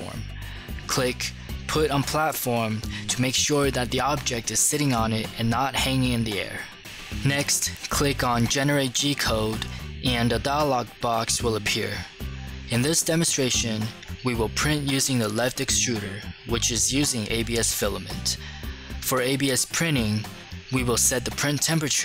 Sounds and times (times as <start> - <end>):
Speech: 0.0 - 18.4, 19.0 - 22.0
Music: 0.0 - 22.0.